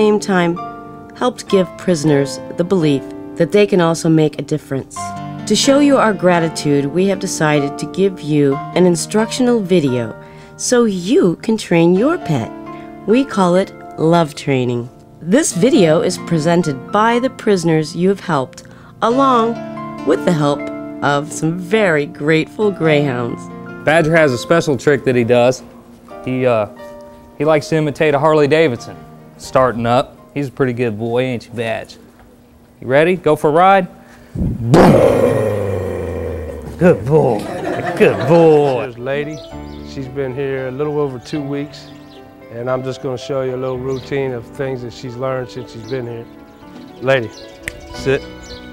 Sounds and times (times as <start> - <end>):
Music: 0.0 - 48.7.